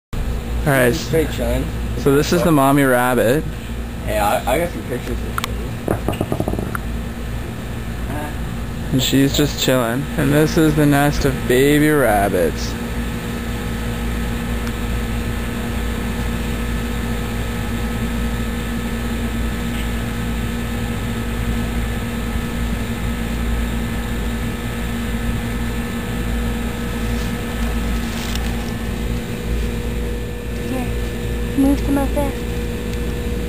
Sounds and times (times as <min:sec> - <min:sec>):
Speech: 0:00.6 - 0:03.5, 0:08.1 - 0:12.8
Outside, rural or natural: 0:01.7 - 0:33.4.